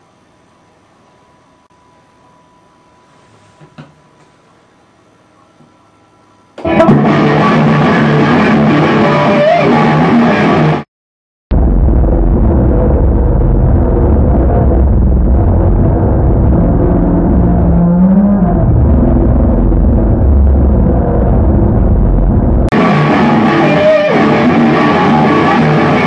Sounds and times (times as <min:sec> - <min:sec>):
Electric guitar: 0:06.6 - 0:10.8, 0:11.6 - 0:26.0.